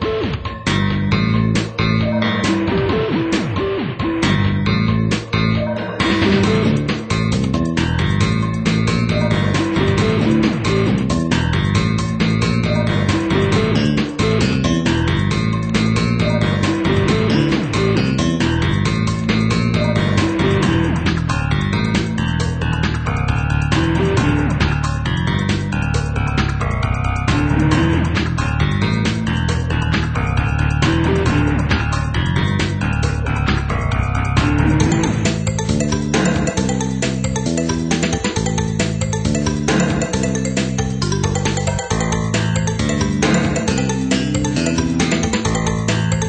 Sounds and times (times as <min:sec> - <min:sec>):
Music: 0:00.0 - 0:46.2.